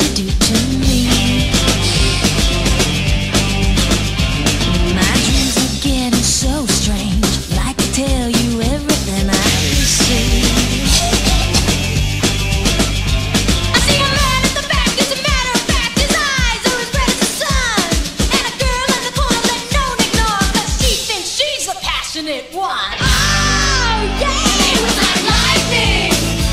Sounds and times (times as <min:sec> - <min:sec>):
Funk: 0:00.0 - 0:21.1.